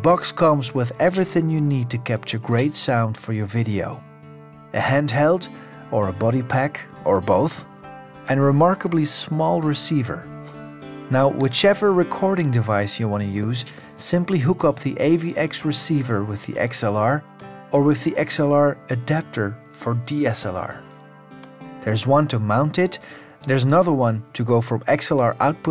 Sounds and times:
Speech: 0.0 - 4.0, 4.8 - 7.7, 8.3 - 10.2, 11.1 - 20.8, 21.8 - 25.7
Music: 0.0 - 25.7.

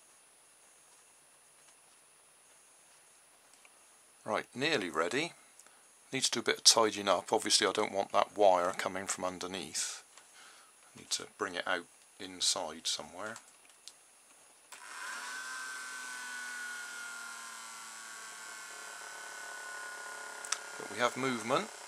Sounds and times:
Hum: 7.0 - 21.8.

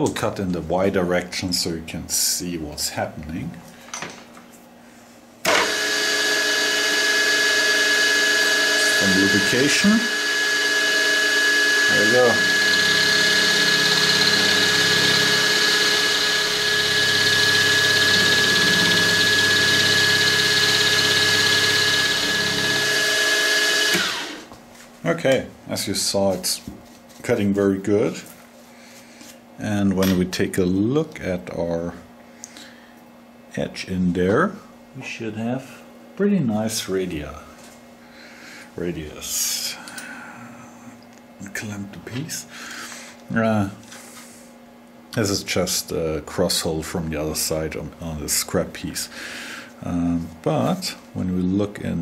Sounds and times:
Speech: 0.0 - 3.6, 8.8 - 10.2, 11.9 - 12.5, 25.0 - 28.4, 29.6 - 32.1, 33.5 - 37.6, 38.8 - 39.9, 41.4 - 42.6, 43.3 - 43.8, 45.2 - 49.2, 49.8 - 52.0.

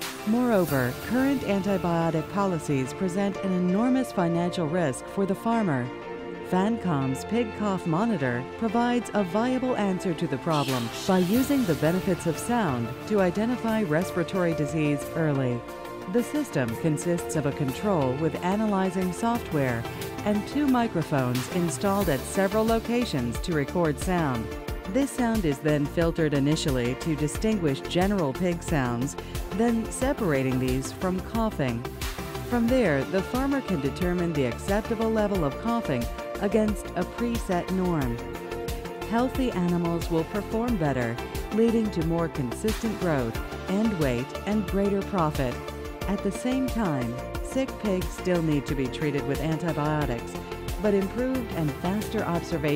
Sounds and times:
Music: 0.0 - 52.7
Speech: 0.3 - 5.9, 6.5 - 31.8, 32.5 - 38.2, 39.1 - 52.7.

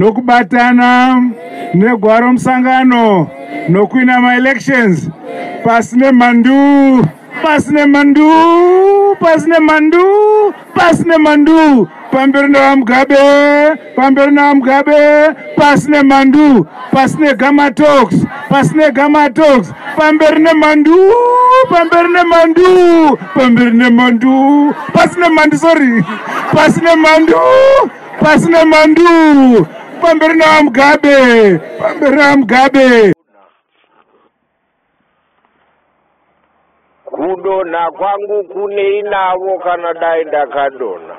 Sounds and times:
Male speech, man speaking: 0.0 - 33.3, 37.1 - 41.1
Narration, monologue: 0.0 - 34.4.

